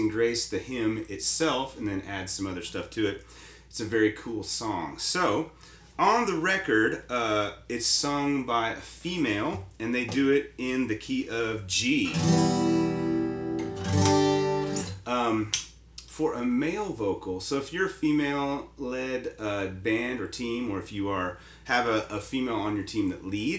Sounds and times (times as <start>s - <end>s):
Speech: 0.0s - 12.2s, 15.0s - 23.5s
Strum: 12.0s - 15.1s.